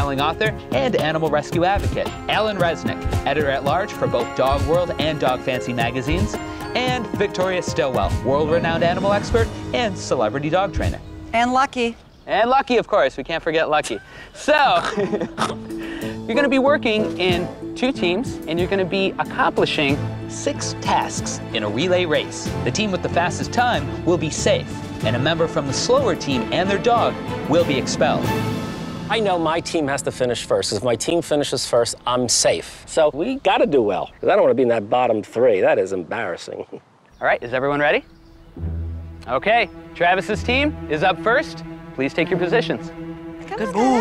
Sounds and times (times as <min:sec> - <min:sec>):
Music: 0:00.0 - 0:12.8, 0:14.7 - 0:32.5, 0:37.5 - 0:44.0.